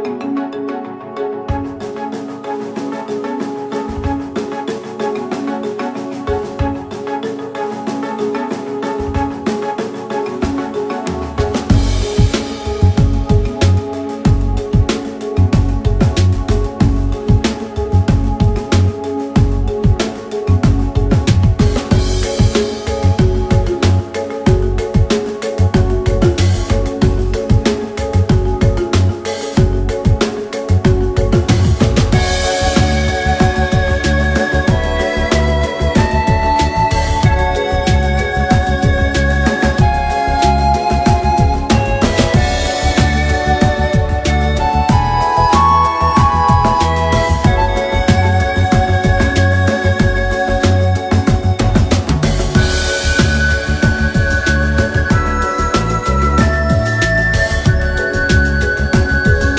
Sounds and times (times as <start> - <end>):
Music: 0.0 - 59.5.